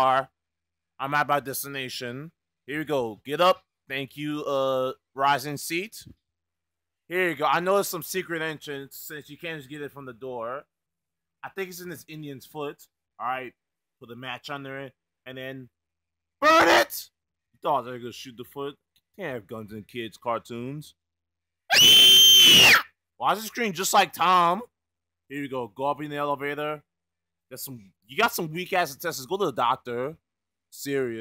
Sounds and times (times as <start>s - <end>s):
Speech: 0.0s - 0.4s, 1.0s - 6.2s, 7.1s - 10.7s, 11.4s - 15.8s, 16.4s - 21.0s, 23.2s - 26.9s, 27.5s - 31.2s.